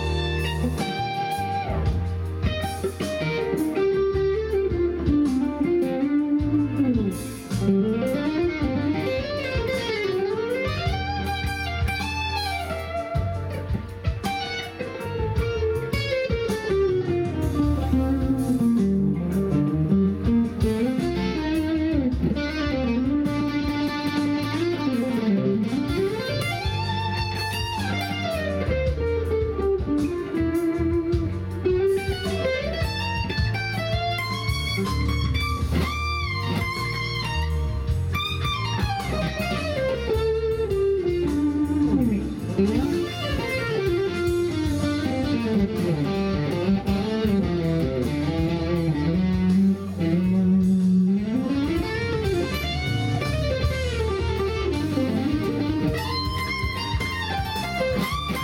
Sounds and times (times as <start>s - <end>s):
Electric guitar: 0.0s - 58.4s.